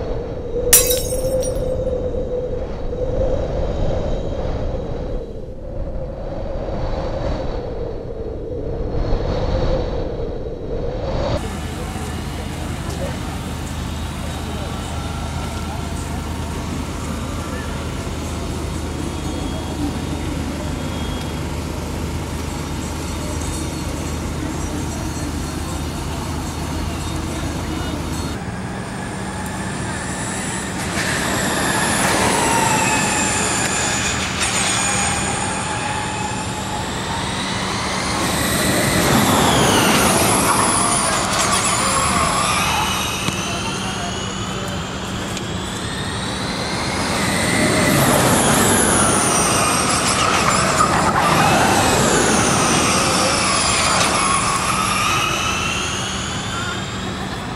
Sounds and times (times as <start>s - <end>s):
Speech: 11.4s - 28.4s, 41.0s - 45.6s, 56.5s - 57.5s.